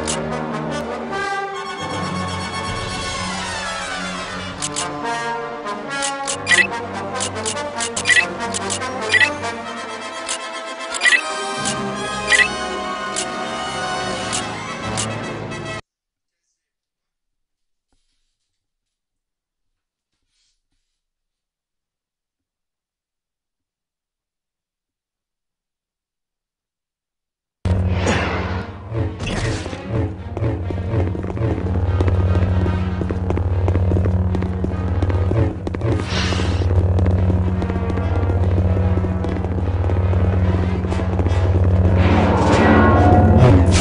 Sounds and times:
Music: 0.0 - 15.8, 27.7 - 43.8.

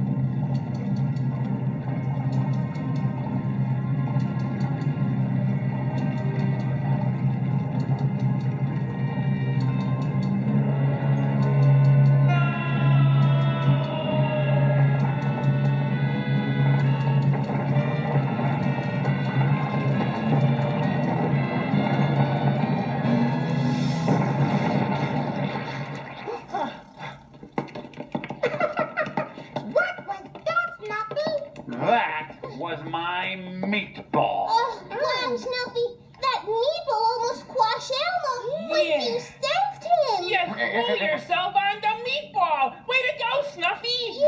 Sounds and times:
Music: 0.0 - 27.3, 27.9 - 44.2.

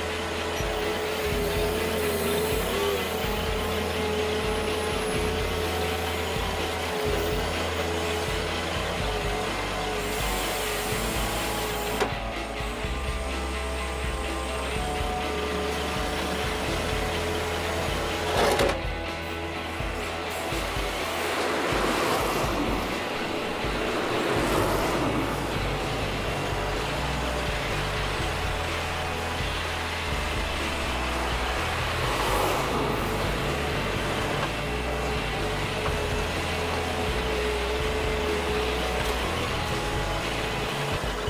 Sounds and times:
Music: 0.0 - 41.3
Outside, urban or manmade: 0.0 - 41.3
Truck: 0.0 - 41.3.

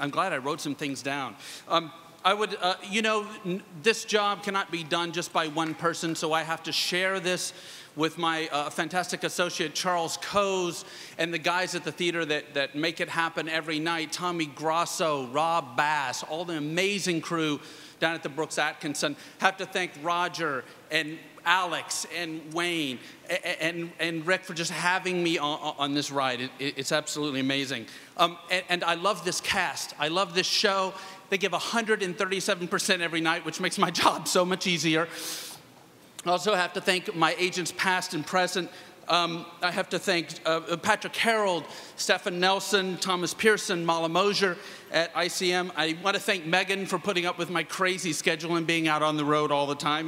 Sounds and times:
Male speech, man speaking: 0.0 - 35.1, 36.2 - 50.0
Narration, monologue: 0.0 - 50.0.

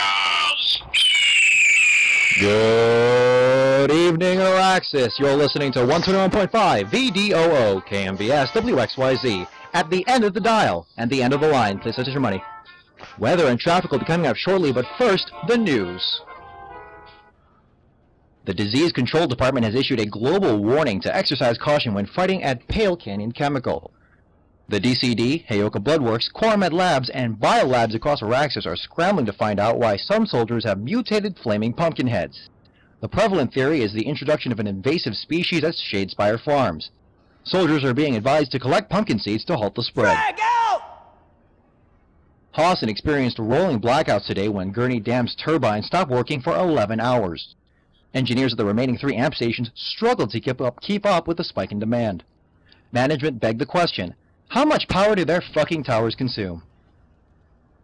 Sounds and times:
Speech: 0.0 - 0.9, 2.4 - 12.5, 13.1 - 16.2, 18.4 - 23.9, 24.7 - 36.9, 37.5 - 41.0, 42.6 - 47.6, 48.2 - 52.2, 52.9 - 56.6.

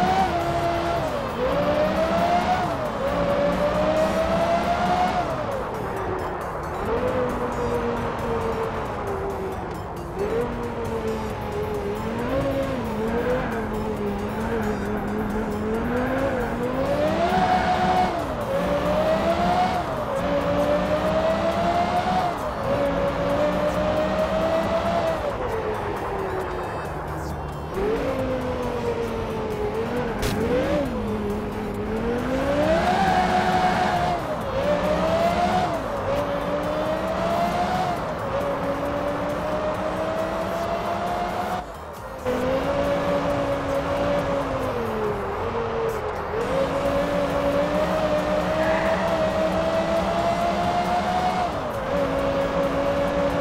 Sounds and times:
Accelerating, revving, vroom: 0.0 - 53.4
Car: 0.0 - 53.4
Music: 0.0 - 53.4.

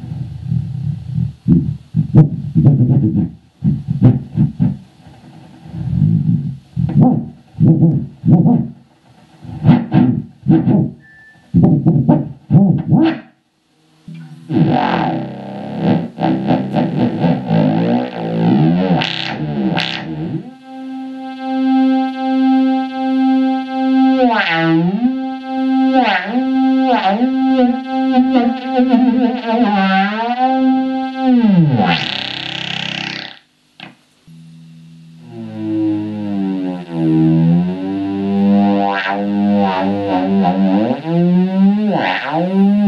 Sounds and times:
Electric guitar: 0.0 - 13.3, 14.0 - 42.8
Strum: 0.0 - 42.8.

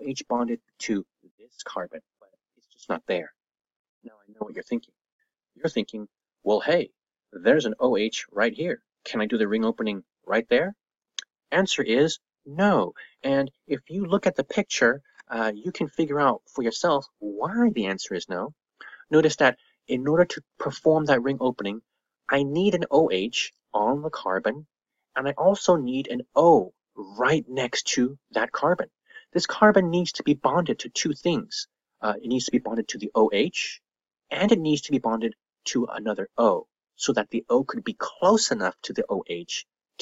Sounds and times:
Narration, monologue: 0.0 - 40.0.

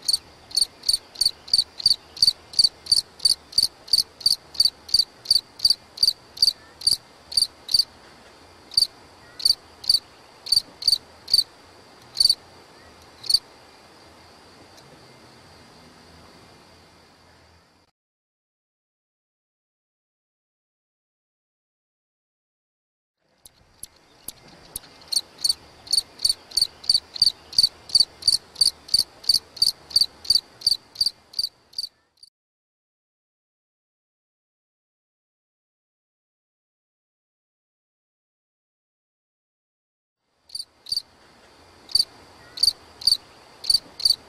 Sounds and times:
Cricket: 0.0 - 17.9, 23.4 - 32.3, 40.3 - 44.2.

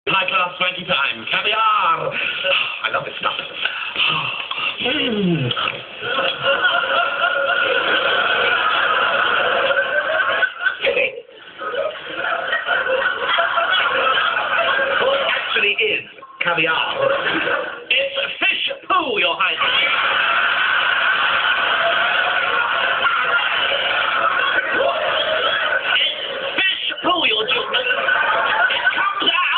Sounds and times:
Speech: 0.1 - 2.2, 15.0 - 17.2, 17.9 - 20.0, 25.9 - 29.5.

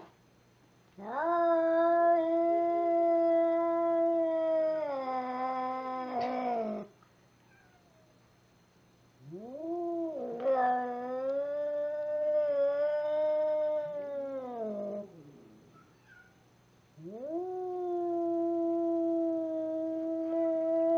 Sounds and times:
Caterwaul: 1.0 - 6.9, 9.2 - 16.4, 17.0 - 20.9.

